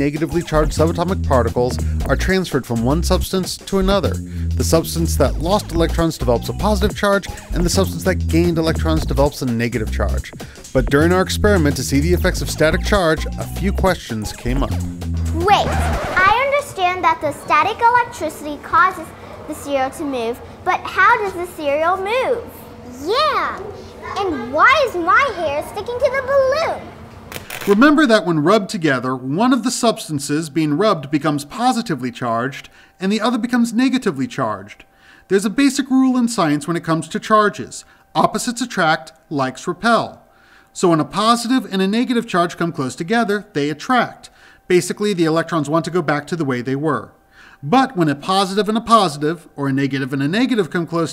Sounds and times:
Speech: 0.0s - 14.8s, 27.7s - 40.2s, 40.8s - 51.1s
Music: 0.0s - 16.5s.

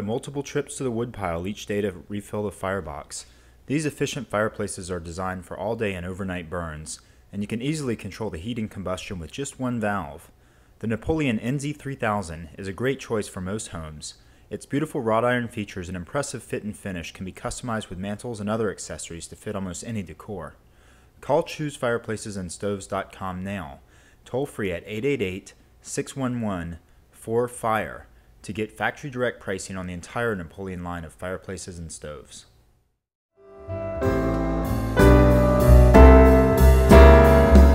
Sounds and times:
Speech: 0.0s - 20.6s, 21.2s - 32.6s.

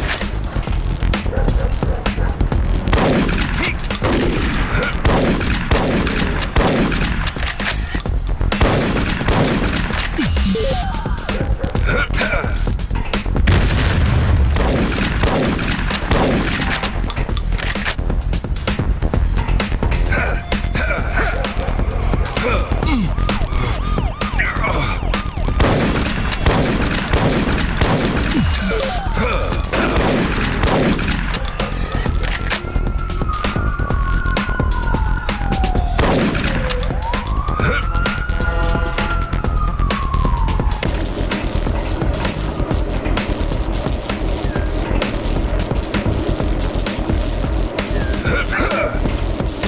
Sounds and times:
Fusillade: 2.8s - 7.7s, 8.6s - 10.2s, 13.5s - 17.0s, 25.6s - 28.8s, 29.7s - 31.6s, 36.0s - 36.7s.

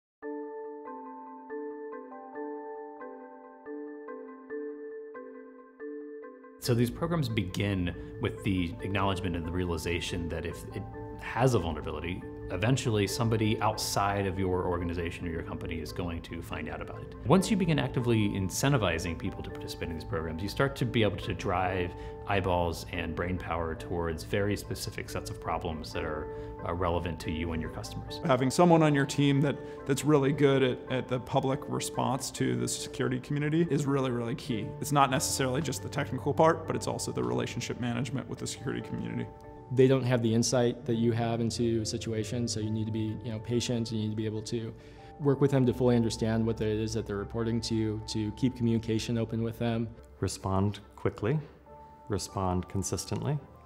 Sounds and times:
Speech: 6.6s - 51.5s, 52.1s - 53.5s.

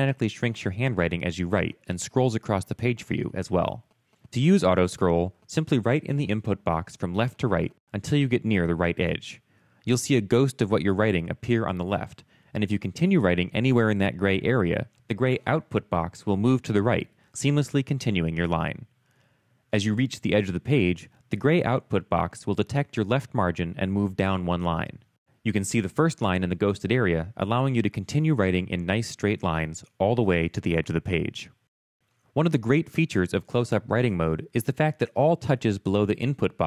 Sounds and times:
Speech: 0.0s - 18.9s, 19.7s - 31.6s, 32.4s - 36.6s.

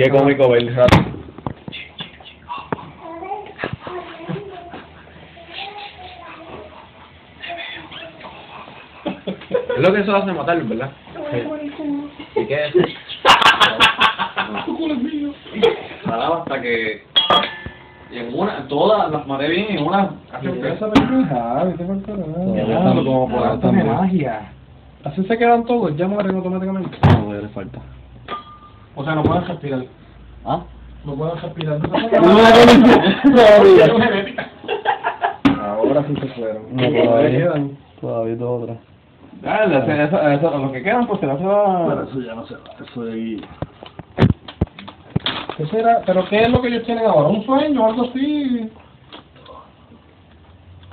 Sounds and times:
Inside, small room: 0.0s - 50.9s.

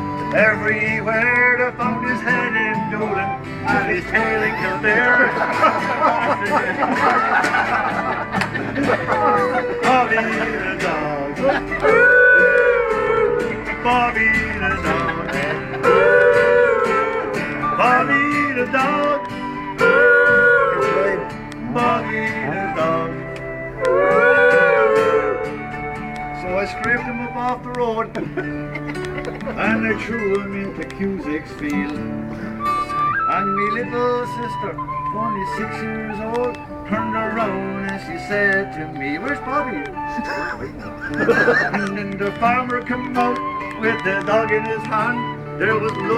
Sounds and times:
Music: 0.0s - 46.1s.

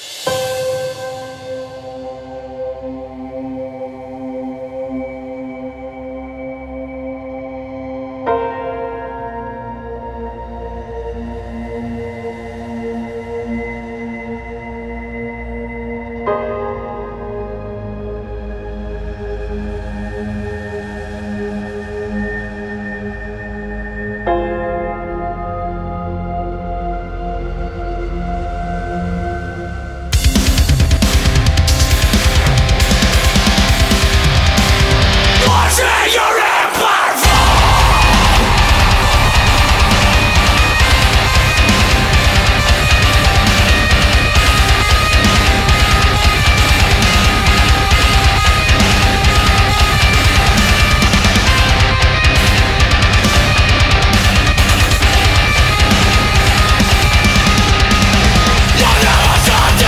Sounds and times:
Music: 0.0s - 59.8s.

